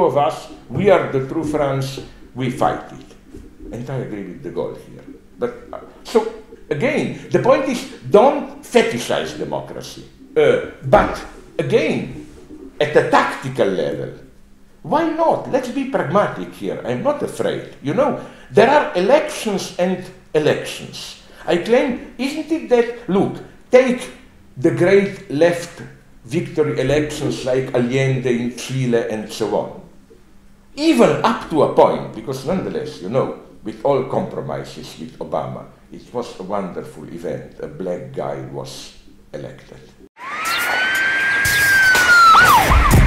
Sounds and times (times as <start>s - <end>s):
Speech: 0.0s - 3.1s, 3.7s - 12.2s, 12.8s - 14.2s, 14.8s - 29.9s, 30.8s - 40.0s
Inside, small room: 0.0s - 43.0s.